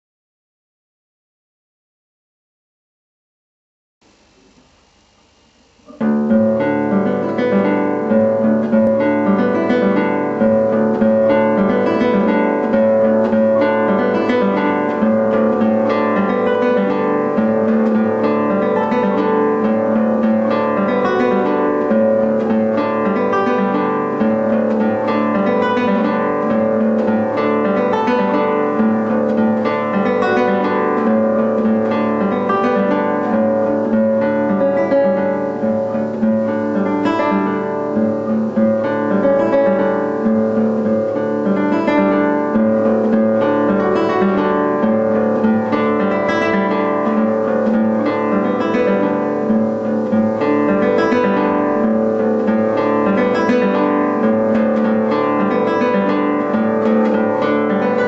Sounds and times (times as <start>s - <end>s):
Acoustic guitar: 4.1s - 58.0s
Strum: 4.1s - 58.0s.